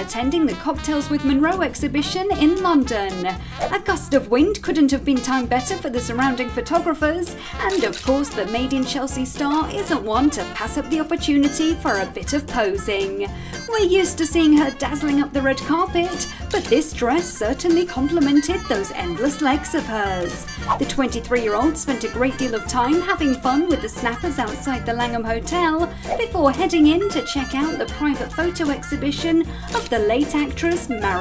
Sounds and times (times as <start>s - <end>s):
Music: 0.0s - 31.2s
Speech: 0.0s - 31.2s.